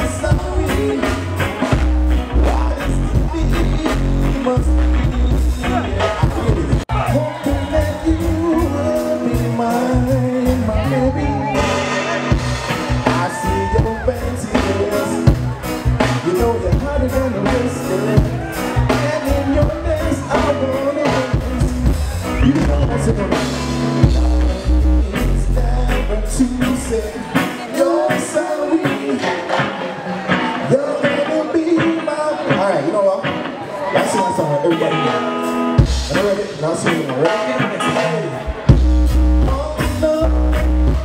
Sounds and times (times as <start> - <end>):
Crowd: 0.0 - 41.0
Music: 0.0 - 41.0
Singing: 2.4 - 12.3, 13.0 - 23.5, 24.2 - 35.0.